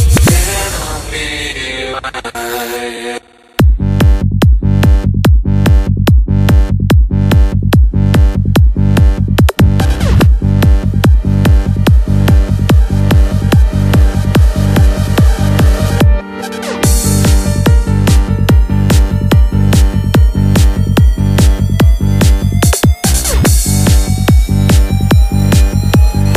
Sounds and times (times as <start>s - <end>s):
Techno: 0.0s - 26.3s.